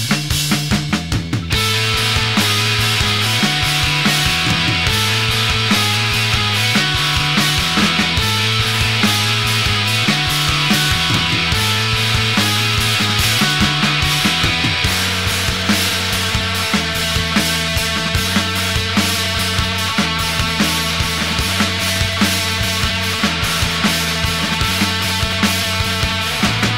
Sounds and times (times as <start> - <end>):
Bass drum: 0.0 - 26.7.